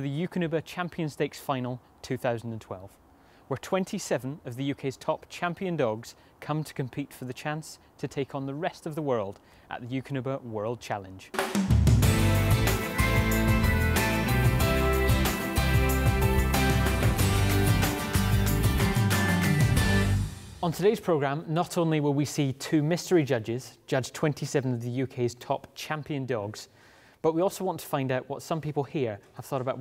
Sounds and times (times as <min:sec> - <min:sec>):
Speech: 0:00.0 - 0:11.4, 0:20.6 - 0:29.8
Music: 0:11.3 - 0:20.9.